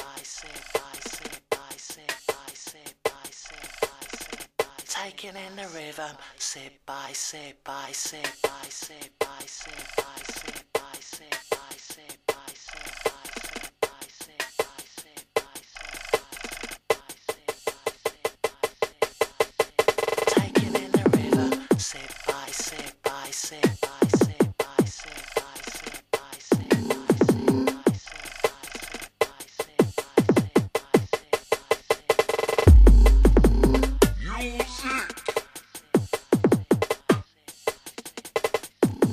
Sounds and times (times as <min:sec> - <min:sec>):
Music: 0:00.0 - 0:39.1.